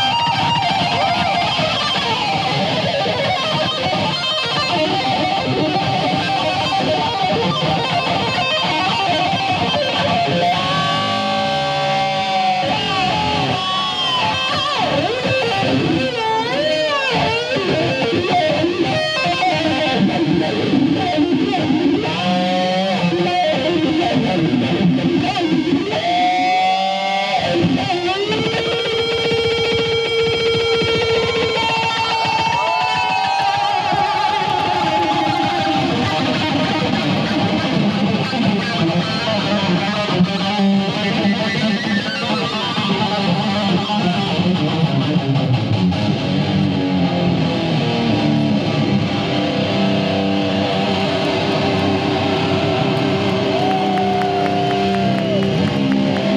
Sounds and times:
Electric guitar: 0.0s - 56.3s.

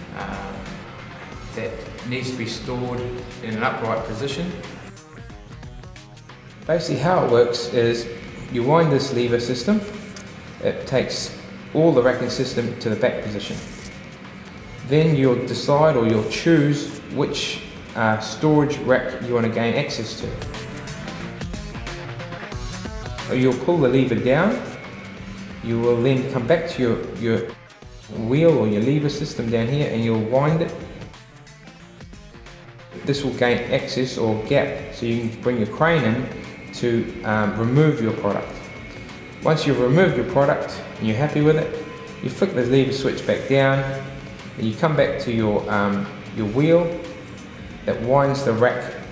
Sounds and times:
Speech: 0.0s - 0.7s, 1.5s - 4.7s, 6.7s - 10.0s, 10.6s - 13.9s, 14.8s - 20.5s, 23.3s - 24.8s, 25.6s - 31.0s, 33.0s - 38.6s, 39.4s - 47.1s, 47.9s - 49.1s
Music: 0.0s - 49.1s.

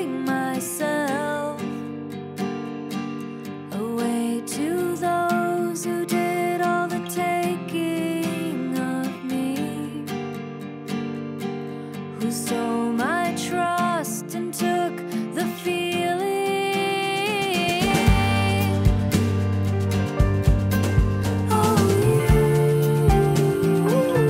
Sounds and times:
Music: 0.0s - 24.2s.

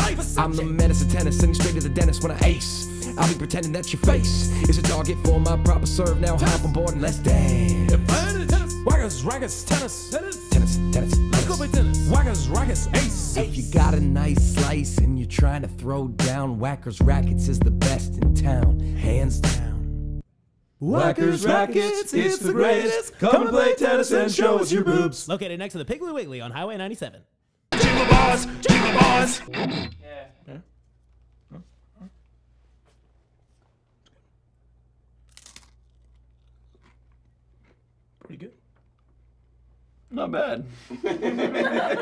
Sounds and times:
Inside, small room: 0.0s - 42.0s
Speech: 24.9s - 27.3s, 38.3s - 38.6s, 40.1s - 40.8s
Crunch: 35.2s - 39.4s.

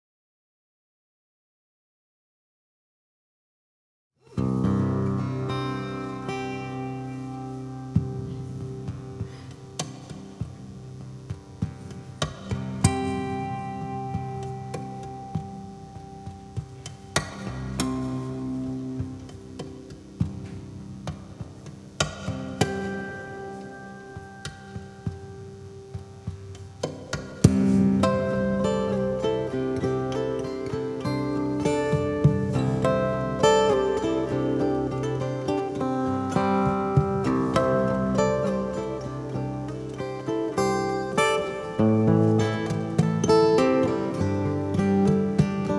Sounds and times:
Acoustic guitar: 4.2s - 45.7s.

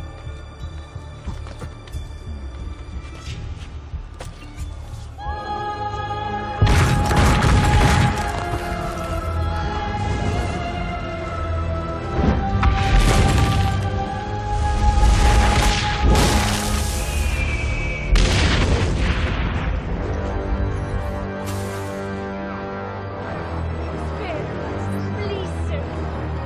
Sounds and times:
Music: 0.0s - 26.4s.

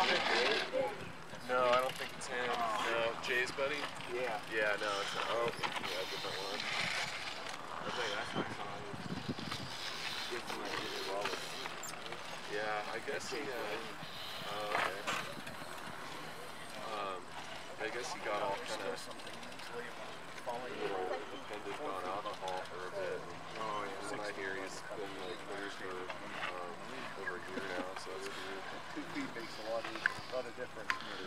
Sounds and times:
Speech: 0.0s - 6.7s, 7.8s - 9.2s, 10.3s - 15.4s, 16.7s - 31.2s.

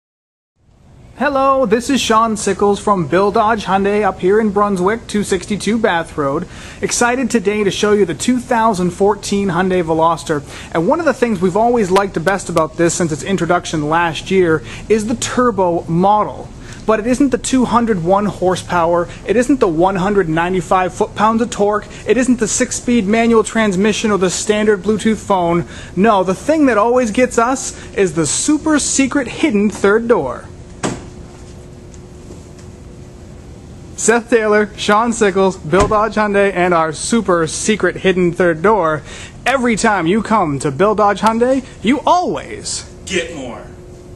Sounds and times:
Speech: 1.2s - 30.5s, 34.0s - 43.8s.

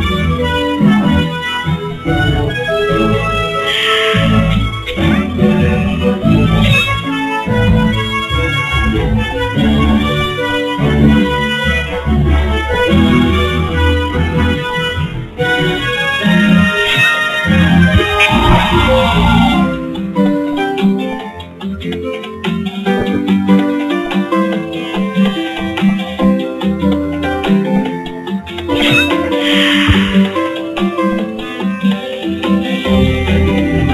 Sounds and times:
Music: 0.0s - 33.9s.

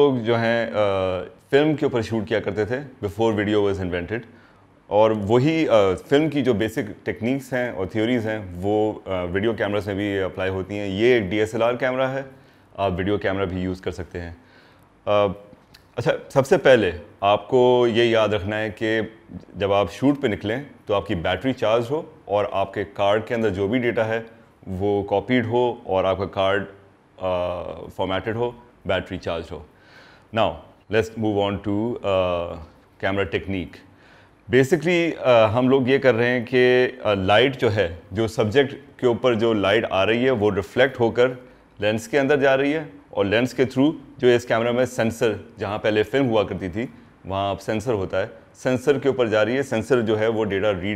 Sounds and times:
Speech: 0.0s - 14.4s, 15.0s - 29.7s, 30.3s - 33.9s, 34.5s - 50.9s.

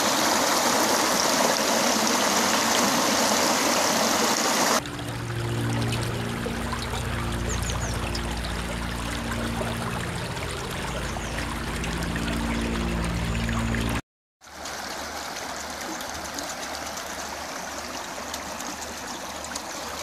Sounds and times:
Stream: 0.0s - 20.0s.

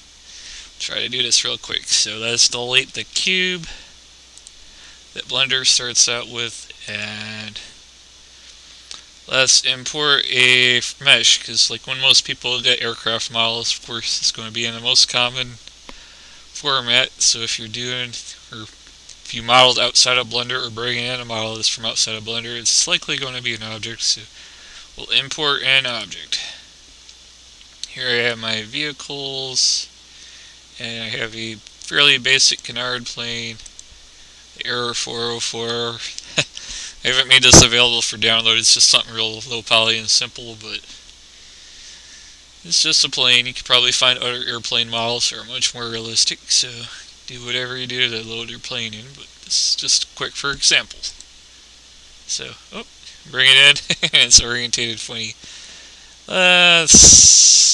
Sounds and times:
Speech: 0.8s - 3.9s, 5.2s - 7.8s, 9.3s - 15.6s, 16.6s - 24.3s, 25.0s - 26.7s, 27.8s - 29.9s, 30.8s - 33.7s, 34.6s - 41.0s, 42.6s - 51.2s, 52.3s - 55.4s, 56.3s - 57.7s.

